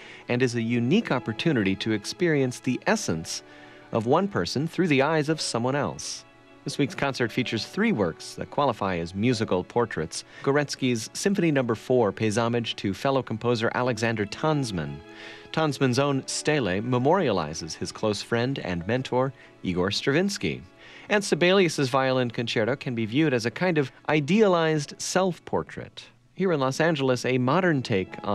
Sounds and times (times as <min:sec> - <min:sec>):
Music: 0:00.0 - 0:28.3
Speech: 0:00.2 - 0:28.3.